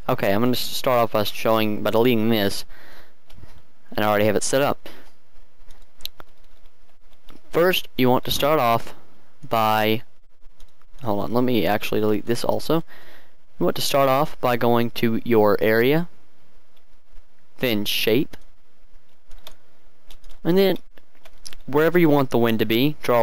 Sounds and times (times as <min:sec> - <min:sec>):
Speech: 0:00.1 - 0:02.7, 0:03.9 - 0:04.8, 0:07.5 - 0:10.1, 0:11.0 - 0:12.8, 0:13.6 - 0:16.1, 0:17.6 - 0:18.4, 0:20.4 - 0:20.8, 0:21.6 - 0:23.2.